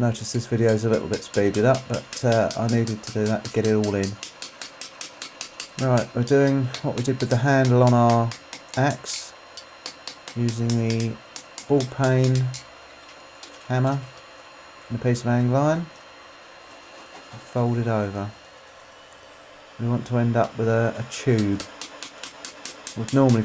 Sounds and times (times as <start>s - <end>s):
Speech: 0.0s - 4.2s, 5.8s - 9.4s, 10.4s - 12.6s, 13.7s - 14.1s, 14.9s - 15.9s, 17.4s - 18.4s, 19.8s - 21.7s, 23.0s - 23.4s
Tools: 0.7s - 8.9s, 21.4s - 23.4s.